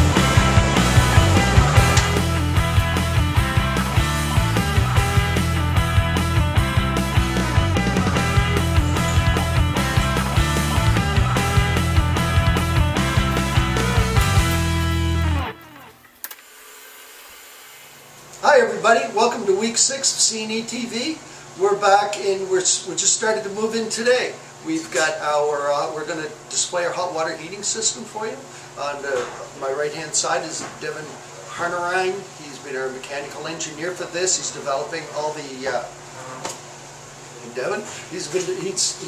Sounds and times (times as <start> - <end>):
Music: 0.0 - 16.2
Speech: 18.4 - 36.5, 37.4 - 39.0.